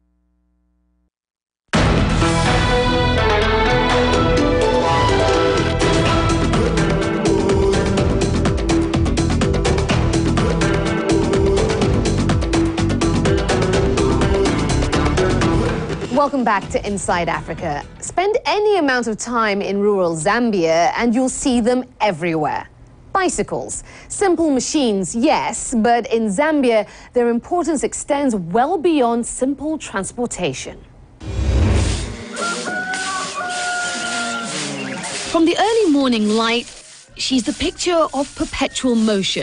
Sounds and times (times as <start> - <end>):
Speech: 16.1 - 30.9, 35.3 - 39.4.